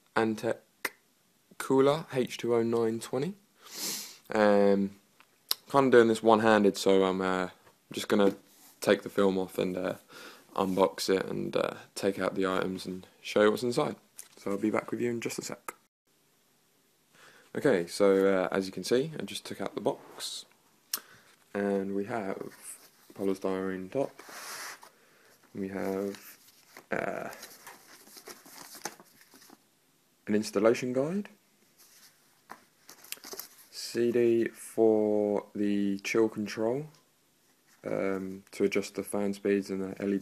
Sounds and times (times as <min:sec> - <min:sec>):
Speech: 0:00.2 - 0:01.0, 0:01.6 - 0:03.4, 0:04.3 - 0:05.0, 0:05.6 - 0:15.9, 0:17.5 - 0:20.5, 0:21.5 - 0:24.2, 0:25.6 - 0:26.3, 0:26.9 - 0:27.5, 0:30.2 - 0:31.4, 0:33.7 - 0:37.0, 0:37.8 - 0:40.2.